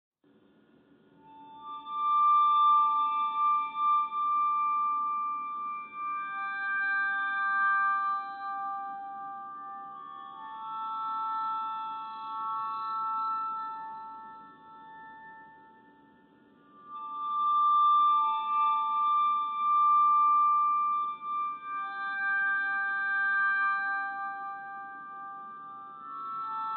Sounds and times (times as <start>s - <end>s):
Glockenspiel: 1.2s - 26.7s.